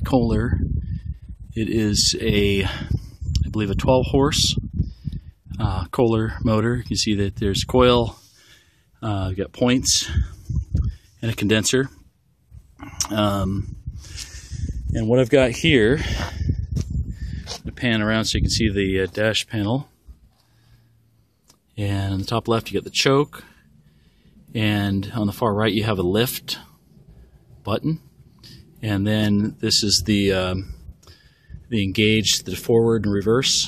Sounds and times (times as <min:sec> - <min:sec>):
Speech: 0:00.0 - 0:00.6, 0:01.6 - 0:04.6, 0:05.5 - 0:08.2, 0:09.0 - 0:10.3, 0:11.2 - 0:12.0, 0:13.0 - 0:13.7, 0:14.9 - 0:16.3, 0:17.6 - 0:19.9, 0:21.8 - 0:23.5, 0:24.6 - 0:26.7, 0:27.6 - 0:28.1, 0:28.8 - 0:30.8, 0:31.7 - 0:33.6.